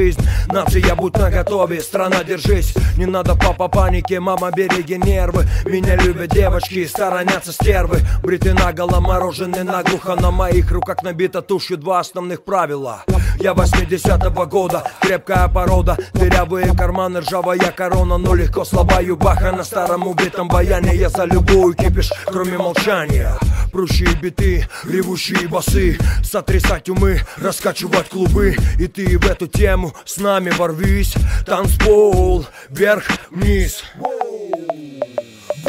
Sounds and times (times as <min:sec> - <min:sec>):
Music: 0:00.0 - 0:11.1, 0:13.1 - 0:27.3, 0:27.9 - 0:29.8, 0:30.8 - 0:32.4, 0:35.0 - 0:35.6
Rapping: 0:00.0 - 0:34.7.